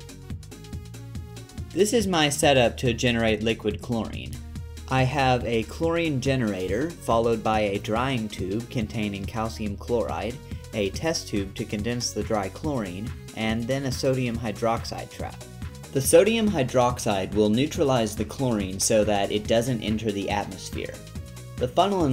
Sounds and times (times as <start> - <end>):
Music: 0.0 - 22.1
Speech: 1.8 - 15.4, 16.0 - 21.0, 21.6 - 22.1.